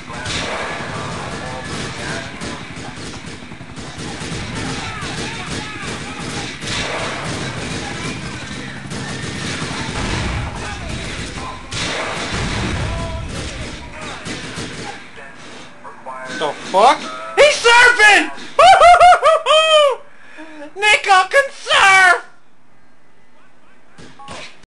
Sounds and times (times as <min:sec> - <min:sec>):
Speech: 0:20.8 - 0:22.3.